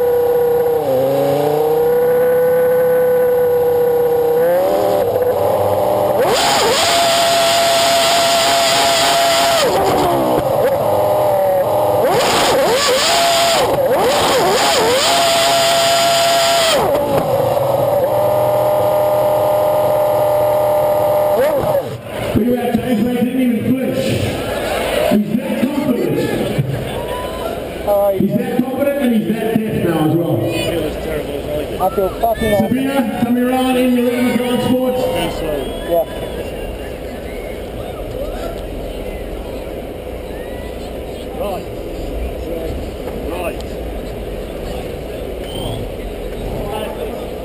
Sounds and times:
Speech: 0:22.4 - 0:24.2, 0:25.1 - 0:37.2.

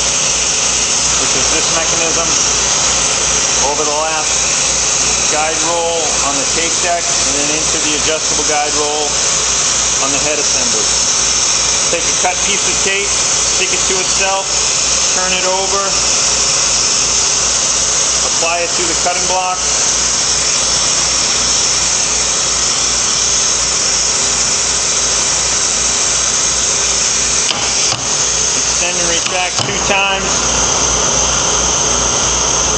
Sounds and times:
Speech: 0:01.2 - 0:02.4, 0:03.6 - 0:04.4, 0:05.3 - 0:09.2, 0:10.0 - 0:10.7, 0:11.9 - 0:14.5, 0:15.1 - 0:16.0, 0:18.2 - 0:19.7, 0:28.8 - 0:30.4.

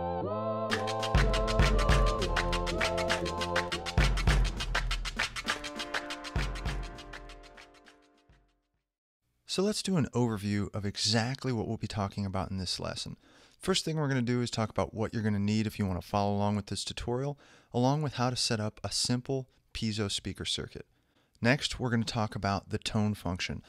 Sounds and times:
Music: 0:00.0 - 0:08.6
Speech: 0:09.5 - 0:23.6.

